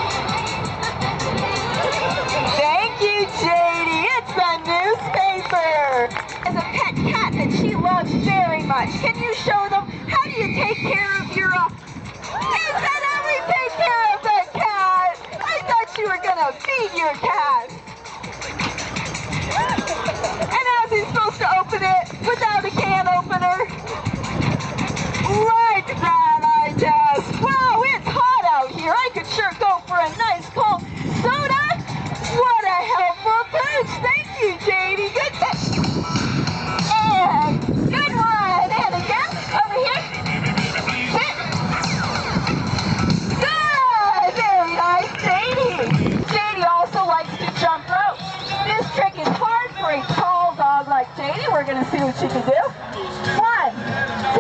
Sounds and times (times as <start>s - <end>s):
Music: 0.0s - 54.4s
Speech: 2.6s - 11.7s, 12.6s - 17.7s, 20.6s - 23.7s, 25.3s - 31.8s, 36.9s - 40.0s, 43.4s - 52.7s.